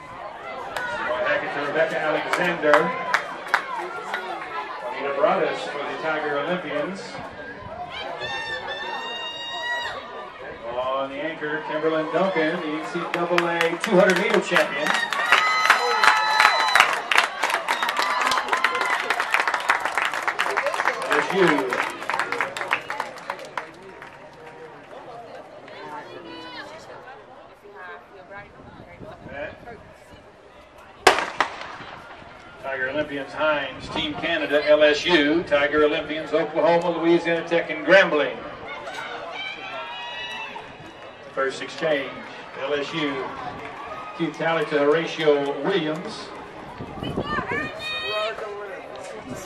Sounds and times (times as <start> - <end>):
Outside, urban or manmade: 0.0 - 49.4.